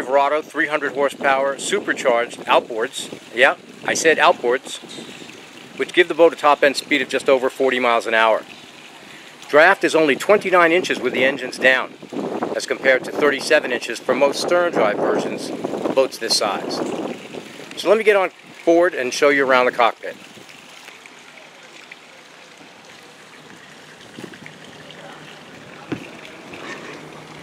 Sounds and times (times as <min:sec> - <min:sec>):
Speech: 0:00.0 - 0:04.9, 0:05.8 - 0:08.4, 0:09.5 - 0:11.9, 0:12.6 - 0:16.9, 0:17.8 - 0:20.2.